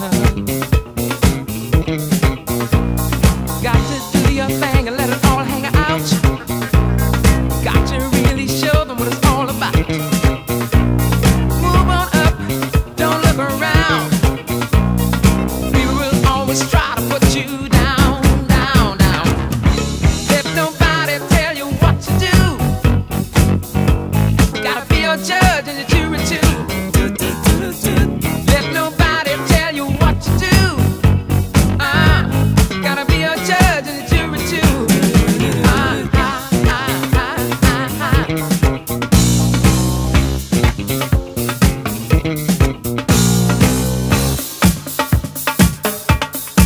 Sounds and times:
Funk: 0.0 - 46.6.

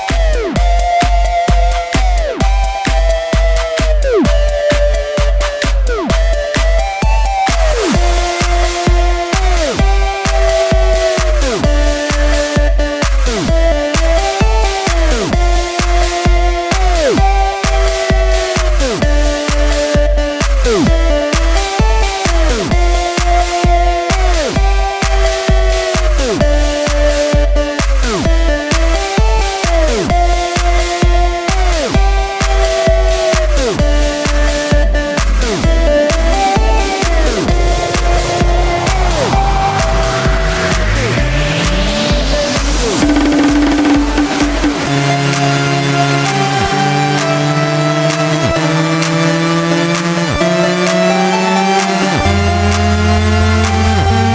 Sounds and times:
House music: 0.0 - 54.3.

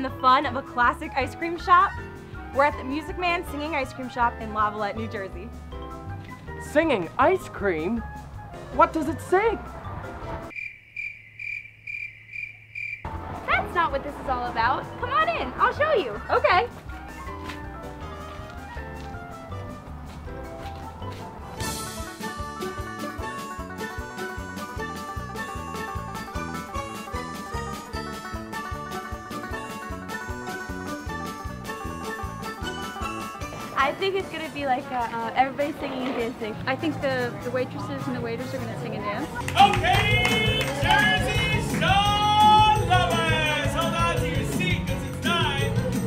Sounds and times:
Soundtrack music: 0.0 - 10.5, 13.1 - 46.0.

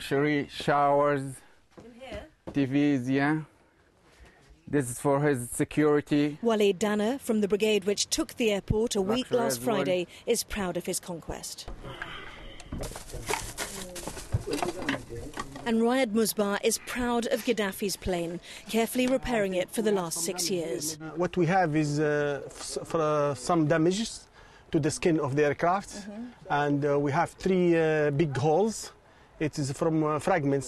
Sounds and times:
Speech: 8.6 - 11.4.

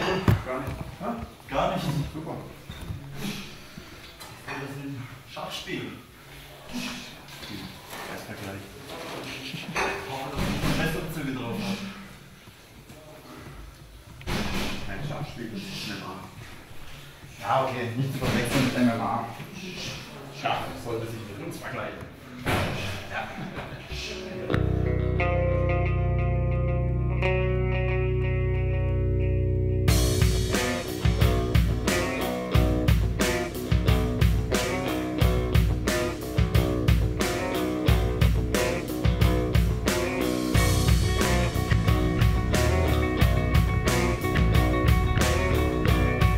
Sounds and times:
Speech: 6.7 - 12.0, 17.4 - 24.6.

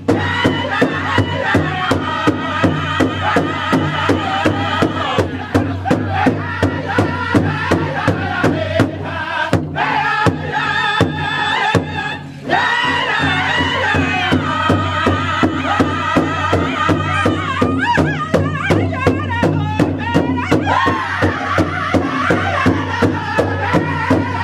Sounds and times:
Music: 0.0 - 24.4.

